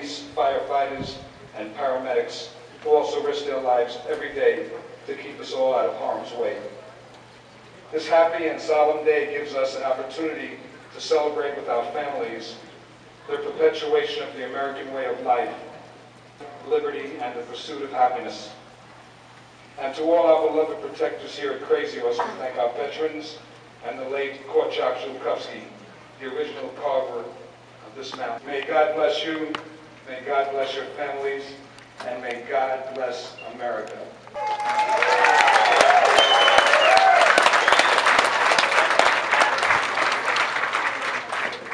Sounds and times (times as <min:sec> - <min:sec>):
Speech: 0:00.0 - 0:06.9, 0:07.9 - 0:15.8, 0:16.5 - 0:18.6, 0:19.8 - 0:34.2.